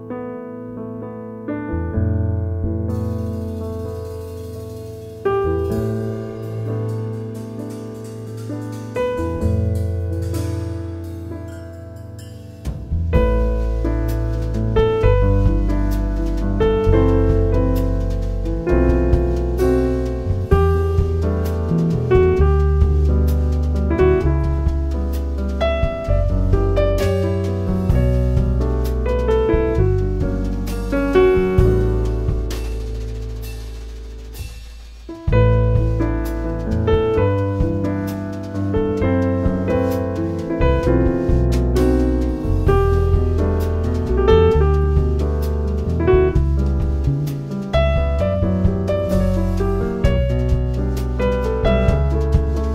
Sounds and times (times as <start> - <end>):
Music: 0.0 - 52.7.